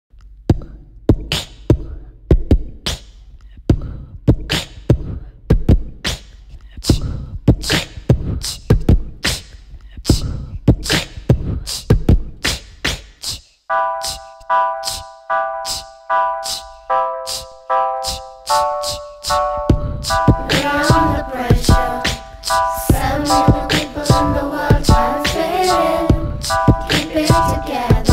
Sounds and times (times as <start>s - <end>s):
Beatboxing: 0.5s - 28.1s.